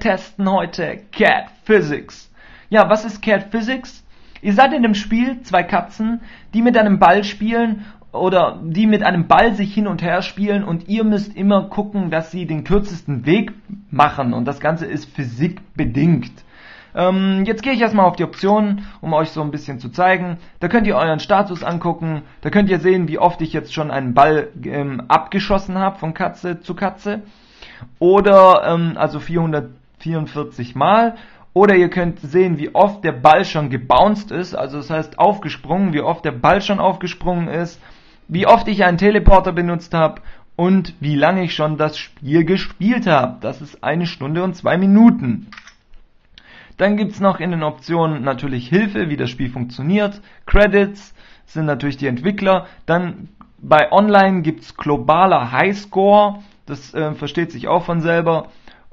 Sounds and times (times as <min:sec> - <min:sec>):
Speech: 0:00.0 - 0:16.4, 0:17.0 - 0:45.7, 0:46.8 - 0:58.5.